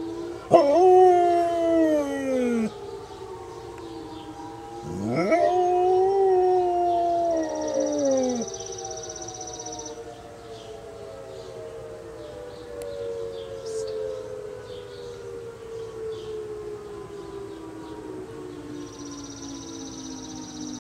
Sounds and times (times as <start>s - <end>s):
Civil defense siren: 0.0s - 20.8s.